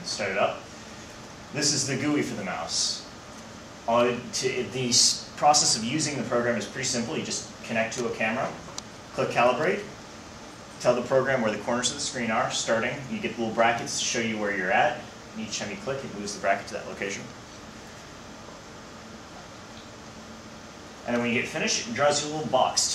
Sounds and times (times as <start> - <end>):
Speech: 0.0 - 0.6, 1.6 - 3.1, 3.9 - 10.0, 10.8 - 17.4, 21.0 - 22.9.